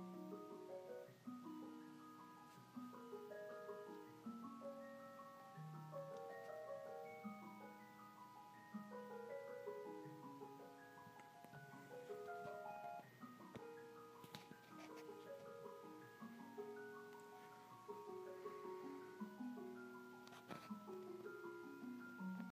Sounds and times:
Music: 0:00.0 - 0:22.5.

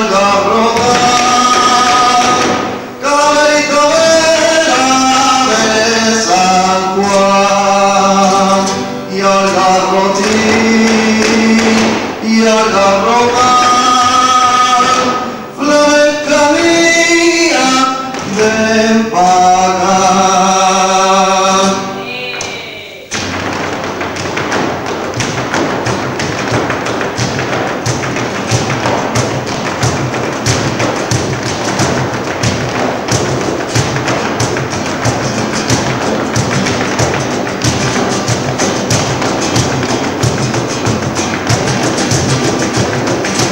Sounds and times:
Flamenco: 0:00.0 - 0:43.5
Thump, thud: 0:00.8 - 0:02.8, 0:10.2 - 0:12.2, 0:18.1 - 0:18.5, 0:23.1 - 0:43.5.

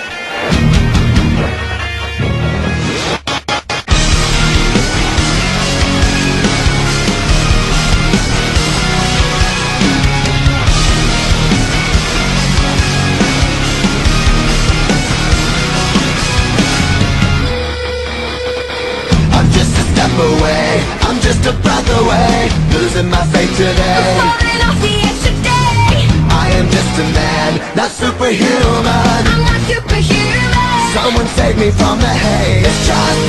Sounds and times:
Theme music: 0:00.0 - 0:33.2.

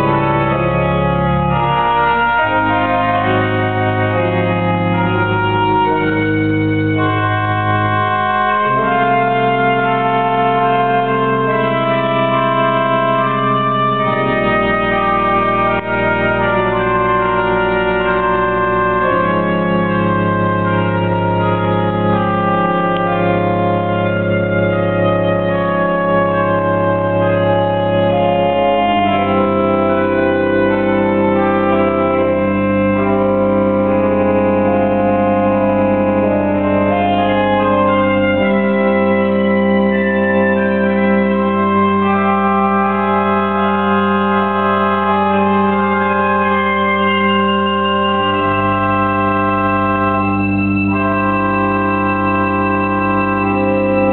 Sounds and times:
Inside, large room or hall: 0:00.0 - 0:54.1
Keyboard (musical): 0:00.0 - 0:54.1.

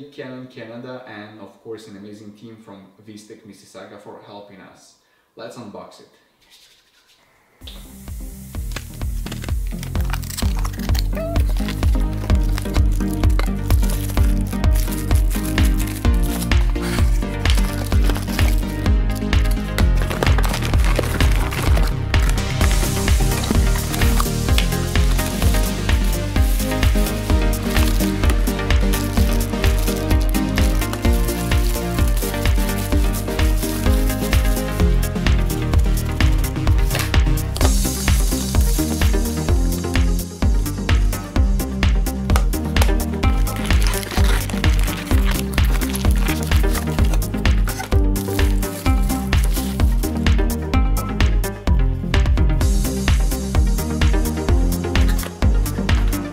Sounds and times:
Crackle: 0:07.6 - 0:18.7, 0:19.4 - 0:24.7, 0:43.4 - 0:49.9
Music: 0:07.6 - 0:56.3.

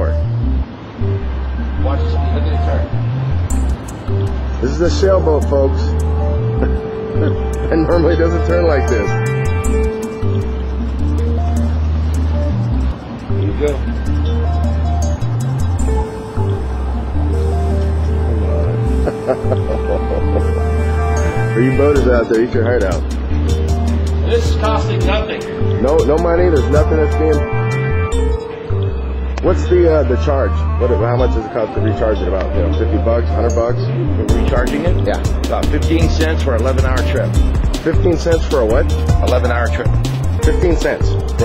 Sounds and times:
Music: 0:00.0 - 0:41.4
Speech: 0:13.4 - 0:13.8, 0:21.6 - 0:23.0, 0:24.2 - 0:27.5, 0:29.4 - 0:41.4.

